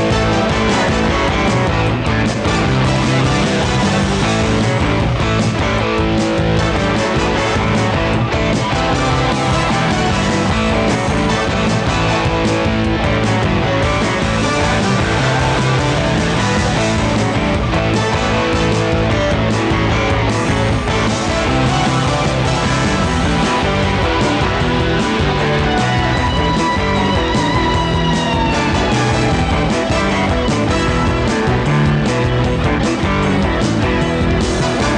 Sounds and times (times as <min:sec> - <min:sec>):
Rock and roll: 0:00.0 - 0:34.9.